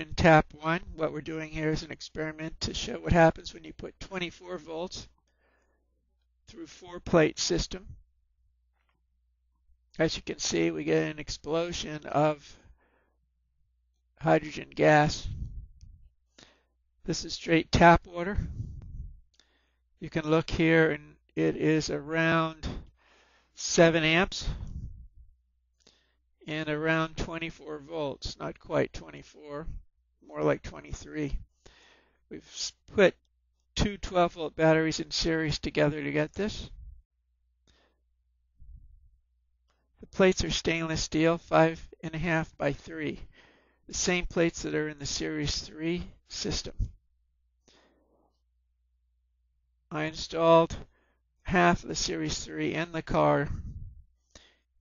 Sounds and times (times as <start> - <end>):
Speech: 0.0 - 5.2, 6.5 - 8.0, 10.0 - 12.6, 14.2 - 15.5, 17.1 - 18.6, 20.0 - 22.9, 23.6 - 24.7, 26.4 - 31.4, 32.3 - 33.2, 33.8 - 36.8, 40.0 - 43.3, 43.9 - 46.9, 49.9 - 50.9, 51.5 - 53.8.